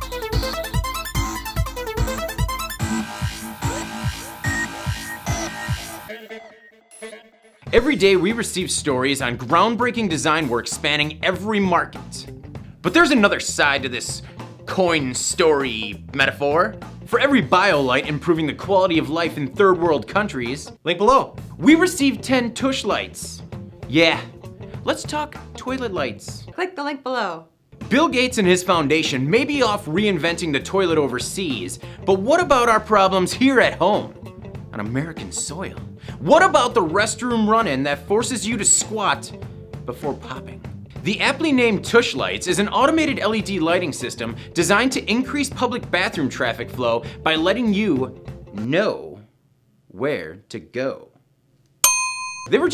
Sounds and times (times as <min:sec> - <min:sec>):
Music: 0:00.0 - 0:26.6, 0:27.7 - 0:49.4, 0:52.5 - 0:52.7
Speech: 0:07.7 - 0:49.3, 0:49.9 - 0:51.2, 0:52.5 - 0:52.7.